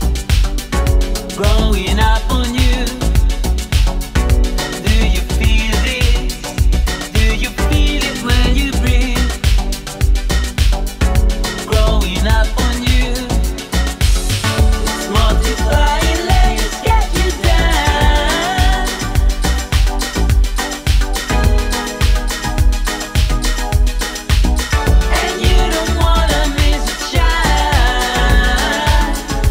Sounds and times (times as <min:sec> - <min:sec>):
Music: 0:00.0 - 0:29.5.